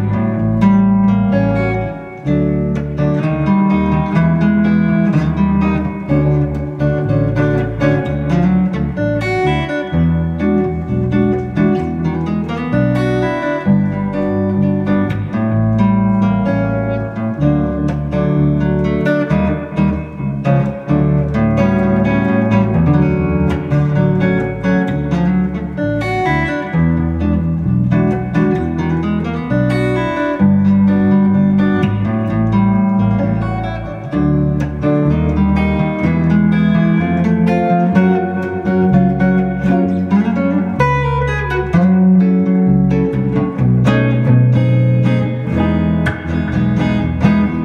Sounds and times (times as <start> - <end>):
Guitar: 0.0 - 47.6.